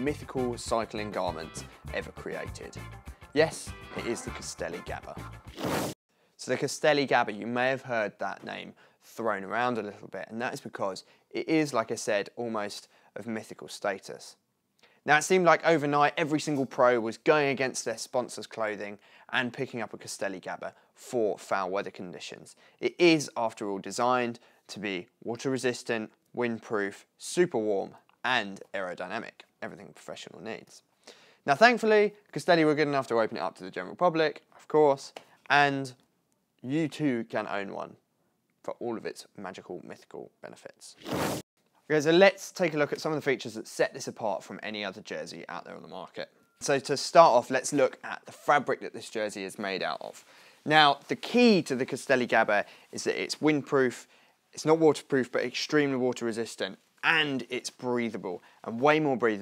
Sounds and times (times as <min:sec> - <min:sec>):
Speech: 0:00.0 - 0:05.3, 0:06.4 - 0:14.4, 0:15.0 - 0:38.0, 0:38.6 - 0:41.0, 0:41.9 - 0:59.4.